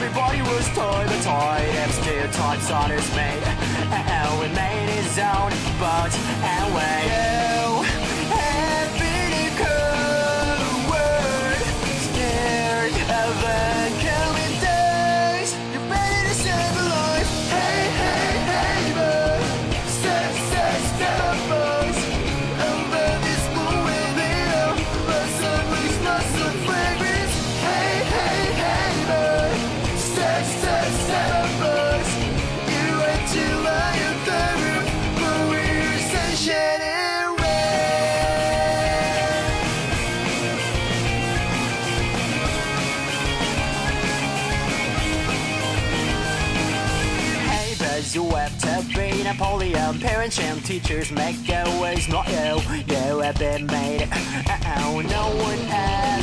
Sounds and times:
Punk rock: 0.0 - 56.2.

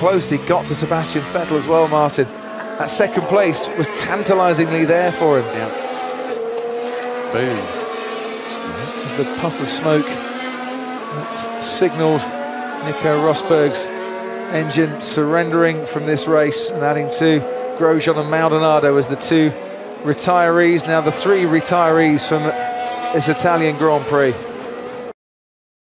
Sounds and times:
Speech: 0.0 - 5.8, 7.3 - 7.7, 8.7 - 10.2, 11.1 - 13.9, 14.5 - 24.4
Accelerating, revving, vroom: 0.0 - 25.1
Car: 0.0 - 25.1
Medium engine (mid frequency): 0.0 - 25.1.

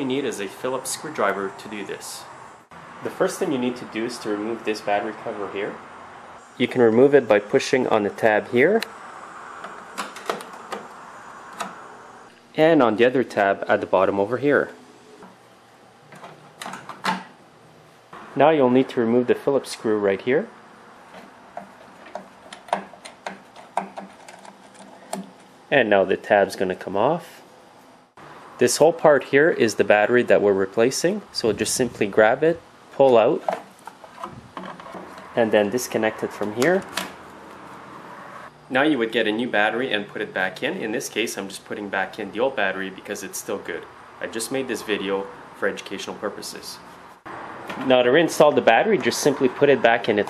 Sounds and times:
Speech: 0.0 - 2.3, 3.0 - 5.8, 6.6 - 8.9, 12.6 - 14.8, 18.4 - 20.5, 25.7 - 27.4, 28.6 - 33.5, 35.4 - 36.9, 38.7 - 46.8, 47.8 - 50.3.

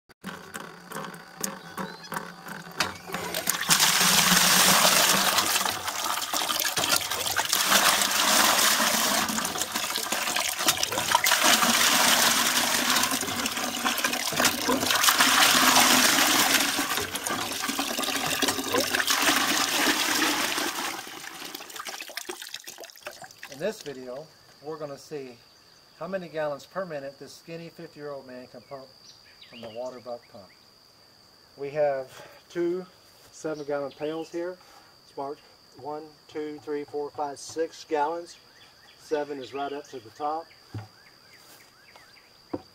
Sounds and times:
Water: 0.5 - 23.9
Sink (filling or washing): 3.2 - 23.6.

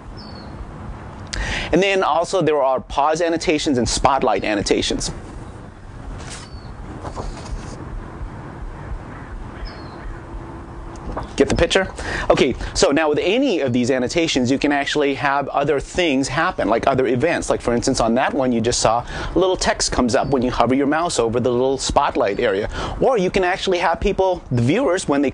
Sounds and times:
Outside, rural or natural: 0.0 - 25.3
Speech: 1.7 - 5.2, 11.4 - 25.3.

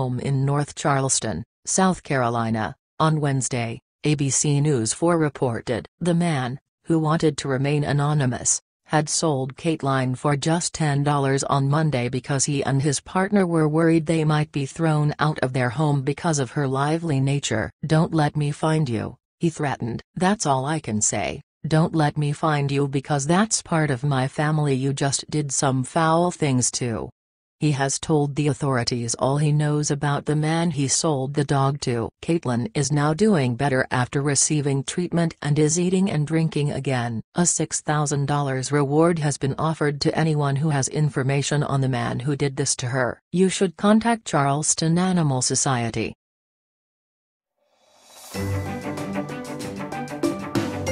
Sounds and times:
Speech: 0.0 - 46.2.

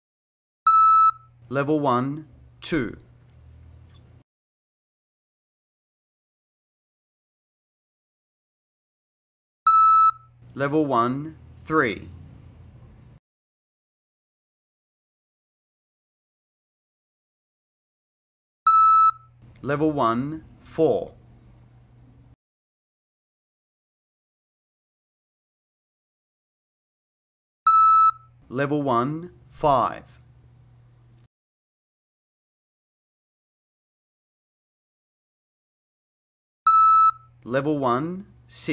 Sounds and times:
Speech: 1.5 - 3.1, 10.6 - 12.2, 19.6 - 21.2, 28.5 - 30.2, 37.5 - 38.7.

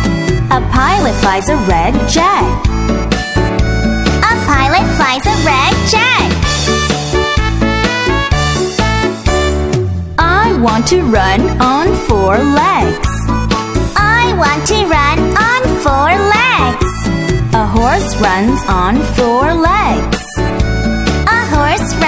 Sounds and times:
Music: 0.0 - 22.0
Speech: 0.5 - 2.6, 4.2 - 6.3, 10.2 - 13.2, 14.0 - 16.8, 17.6 - 20.1, 21.3 - 22.0.

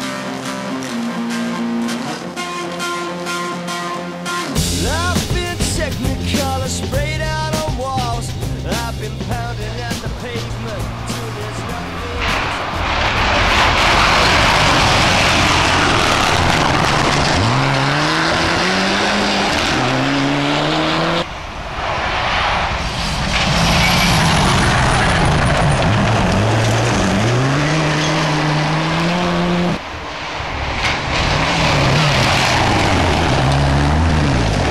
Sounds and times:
Race car, auto racing: 0.0 - 5.0, 9.5 - 34.7
Outside, rural or natural: 3.7 - 34.7.

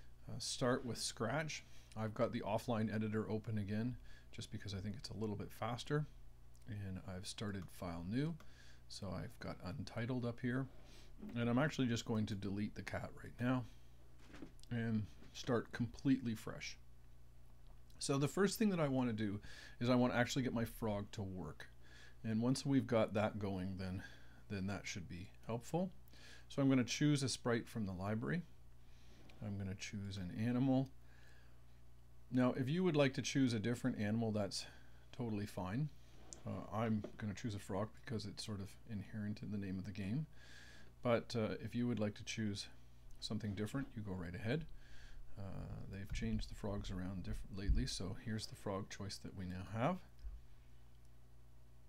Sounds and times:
Speech: 0.2 - 13.7, 14.6 - 16.8, 18.0 - 28.5, 29.4 - 31.0, 32.3 - 40.3, 41.0 - 44.7, 45.4 - 50.1.

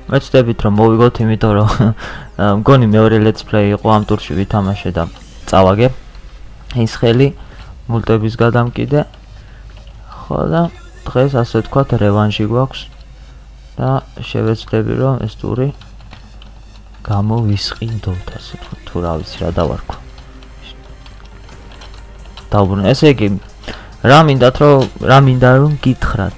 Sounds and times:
Music: 0.0 - 26.3
Speech: 0.1 - 6.0, 6.7 - 9.1, 10.1 - 12.9, 13.8 - 15.8, 17.0 - 20.0, 22.5 - 23.4, 24.0 - 26.3.

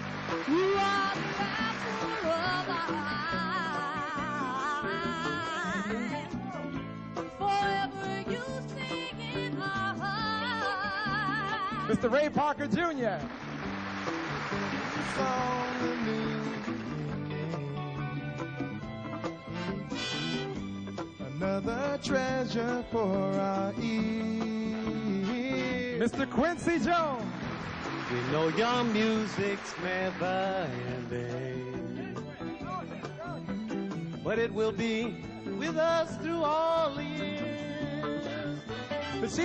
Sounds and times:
Music: 0.0 - 39.4.

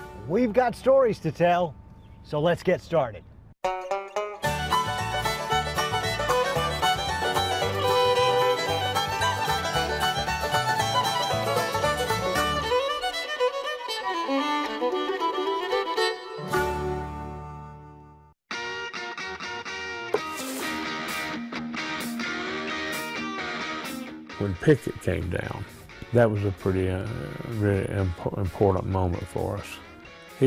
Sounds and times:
Music: 0.0 - 0.5, 3.6 - 30.4
Speech: 0.3 - 3.2, 24.4 - 29.8.

